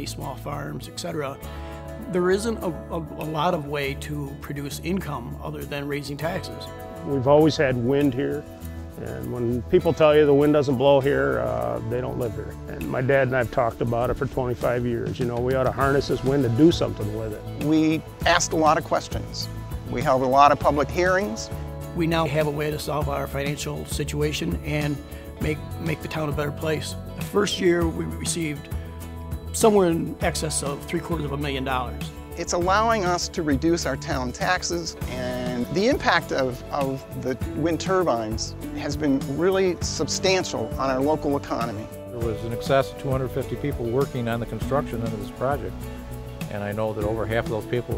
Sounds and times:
Speech: 0:00.0 - 0:01.4, 0:02.0 - 0:08.4, 0:09.0 - 0:28.7, 0:29.6 - 0:45.8, 0:46.5 - 0:47.9
Music: 0:00.0 - 0:47.9.

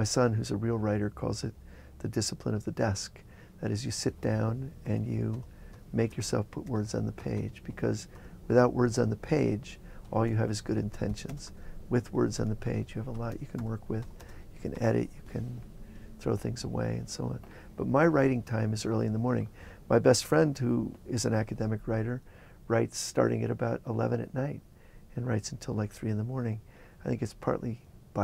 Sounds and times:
Speech: 0:00.0 - 0:15.6, 0:16.2 - 0:28.2.

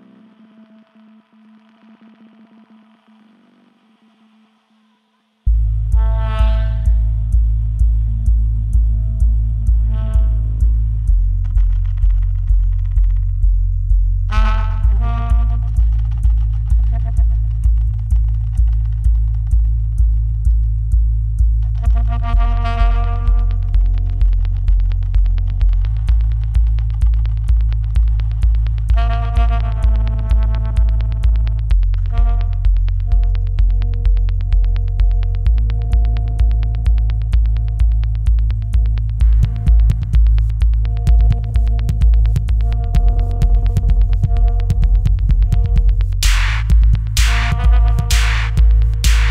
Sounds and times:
Electronic music: 0:00.0 - 0:49.3.

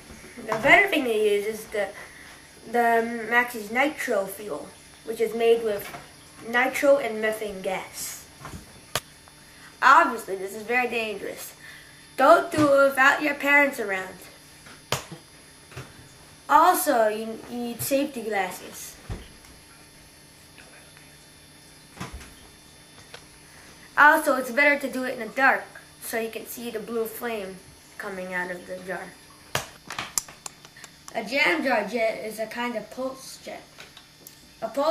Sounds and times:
Speech: 0:00.4 - 0:02.0, 0:02.7 - 0:08.2, 0:09.8 - 0:11.6, 0:12.2 - 0:14.3, 0:16.5 - 0:19.0, 0:24.0 - 0:29.2, 0:31.1 - 0:33.7, 0:34.6 - 0:34.9.

